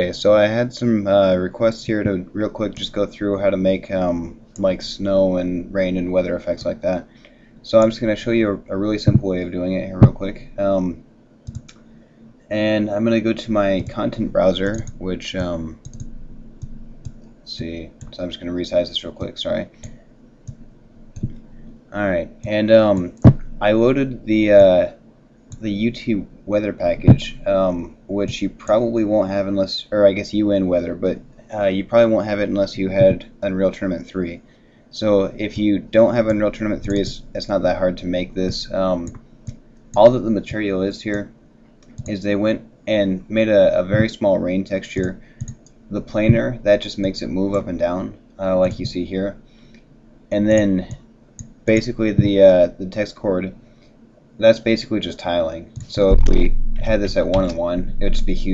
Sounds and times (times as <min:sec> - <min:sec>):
Speech: 0:00.0 - 0:11.0, 0:12.5 - 0:15.8, 0:17.5 - 0:19.8, 0:21.9 - 0:25.0, 0:25.6 - 0:39.2, 0:40.0 - 0:41.3, 0:42.0 - 0:45.2, 0:45.9 - 0:49.4, 0:50.3 - 0:51.0, 0:51.7 - 0:53.6, 0:54.4 - 0:58.5.